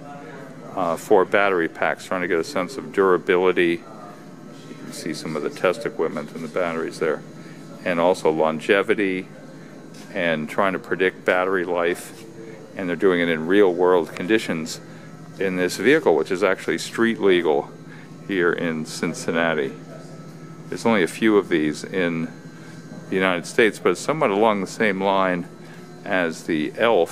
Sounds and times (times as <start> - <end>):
Speech: 0.0 - 22.4, 23.1 - 27.1.